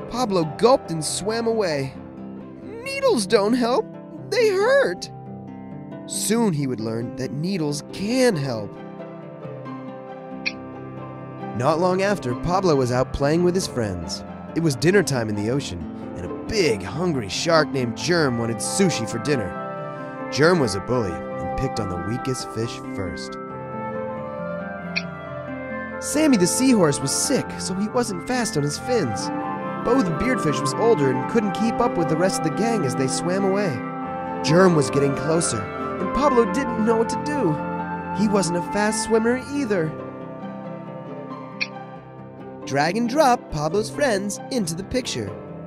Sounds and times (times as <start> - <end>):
Music: 0.0 - 45.6.